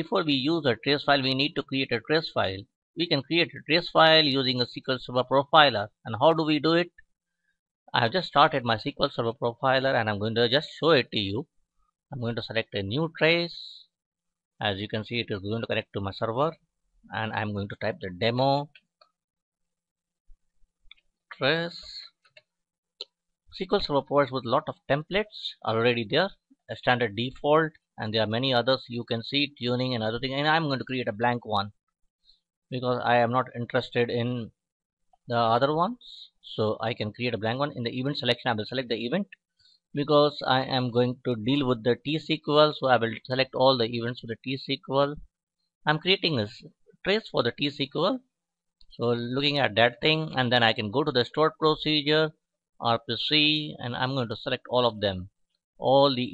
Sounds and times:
Speech: 0.0 - 6.9, 8.0 - 11.5, 12.2 - 13.9, 14.6 - 18.8, 21.3 - 22.1, 23.6 - 31.8, 32.7 - 34.5, 35.3 - 39.4, 40.0 - 45.2, 45.9 - 48.2, 48.9 - 56.3.

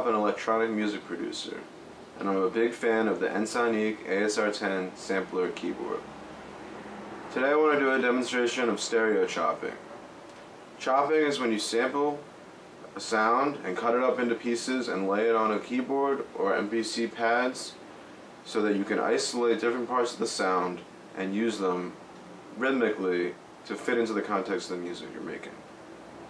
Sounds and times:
Speech: 0.0 - 6.1, 7.3 - 9.8, 10.8 - 17.8, 18.4 - 25.6.

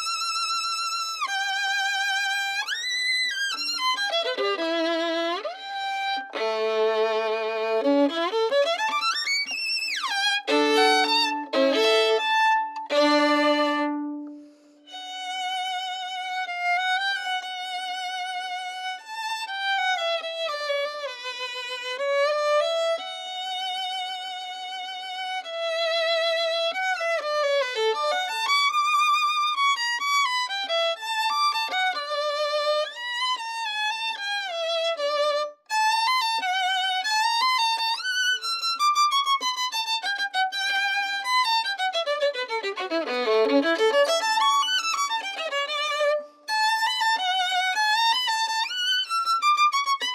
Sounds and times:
Violin, fiddle: 0.0 - 50.1.

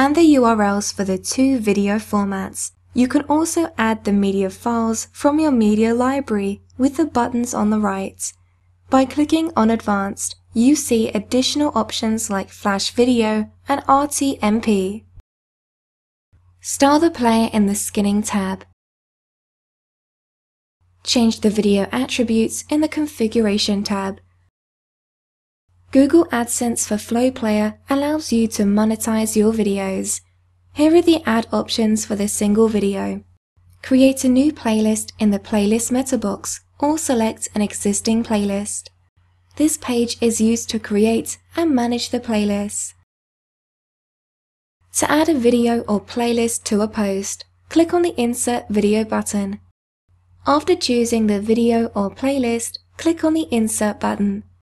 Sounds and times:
Narration, monologue: 0.0 - 15.2, 16.4 - 18.8, 20.8 - 24.5, 25.7 - 43.1, 44.8 - 54.6.

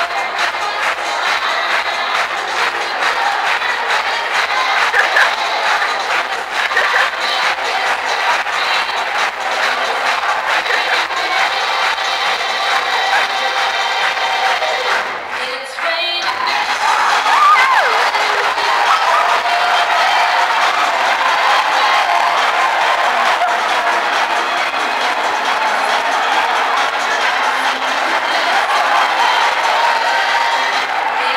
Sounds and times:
Music: 0.0 - 31.3.

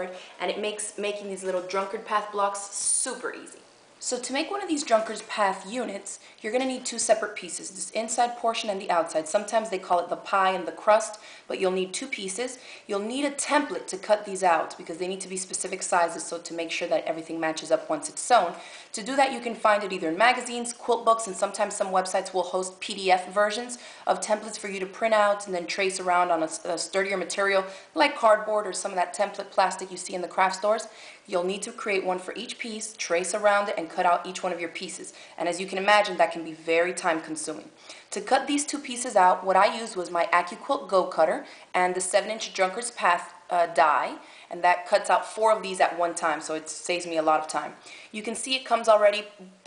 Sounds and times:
Speech: 0.0 - 49.6.

